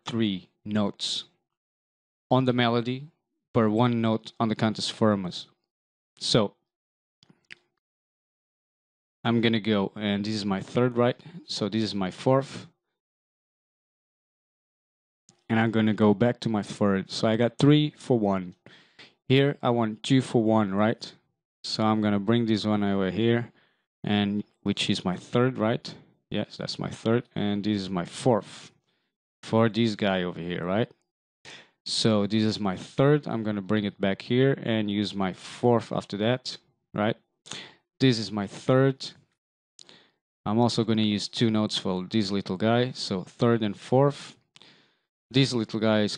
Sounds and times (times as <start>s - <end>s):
Speech: 0.0s - 1.3s, 2.3s - 5.6s, 6.2s - 6.6s, 9.3s - 12.7s, 15.4s - 18.6s, 19.2s - 28.8s, 29.4s - 30.9s, 31.9s - 37.2s, 38.0s - 39.2s, 40.5s - 44.4s, 45.3s - 46.1s.